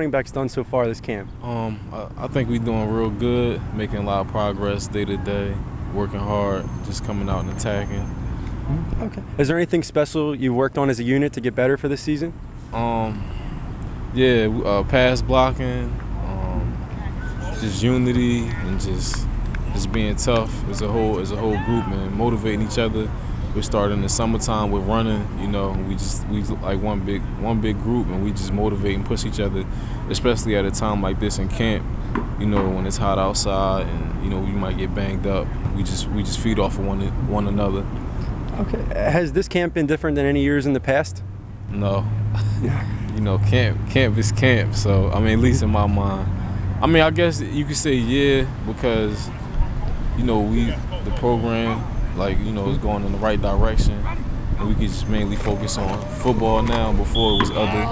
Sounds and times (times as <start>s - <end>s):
Speech: 0.0s - 8.1s, 8.7s - 13.2s, 14.2s - 31.8s, 32.4s - 37.9s, 38.6s - 49.3s, 50.2s - 57.9s.